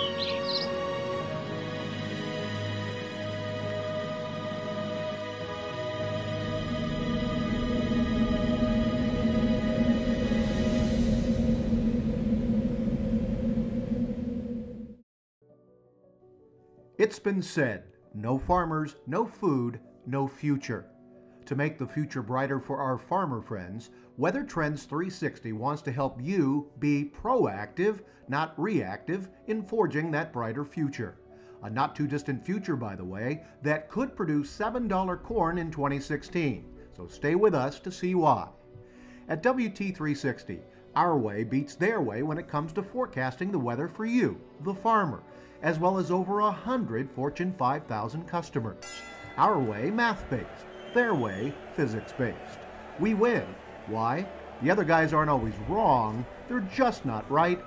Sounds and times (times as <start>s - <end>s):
Music: 0.0s - 14.0s, 15.4s - 57.6s.